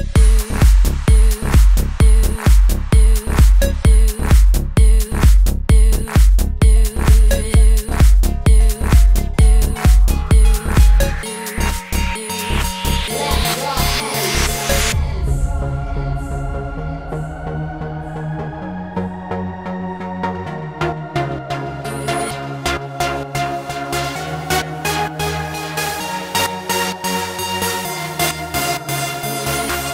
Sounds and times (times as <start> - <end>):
Dance music: 0.0 - 29.9.